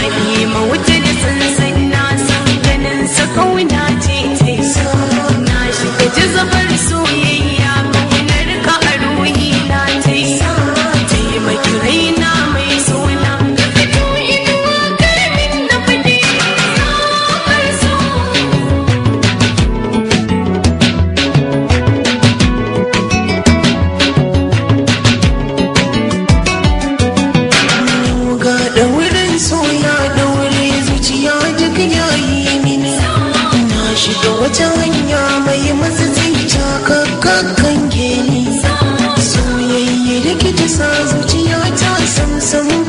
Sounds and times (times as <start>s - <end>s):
Music: 0.0s - 42.8s.